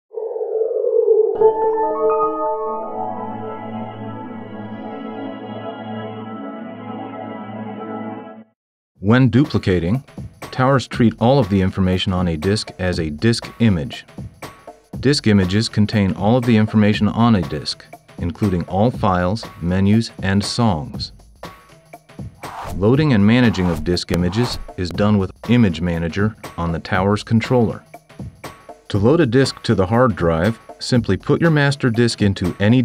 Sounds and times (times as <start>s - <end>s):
Ambient music: 1.3s - 8.6s, 22.1s - 24.9s
Speech: 9.0s - 14.1s, 15.0s - 21.2s, 22.7s - 27.9s, 28.9s - 32.8s.